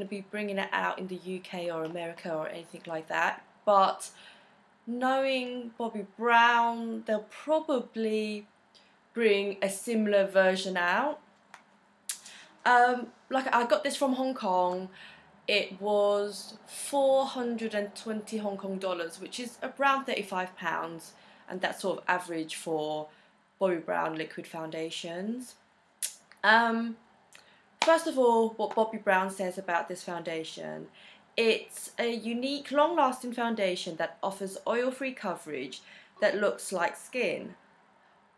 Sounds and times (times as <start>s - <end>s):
Speech: 0.0s - 4.2s, 4.9s - 8.5s, 9.2s - 11.2s, 12.7s - 14.9s, 15.5s - 25.6s, 26.4s - 27.0s, 27.8s - 37.6s.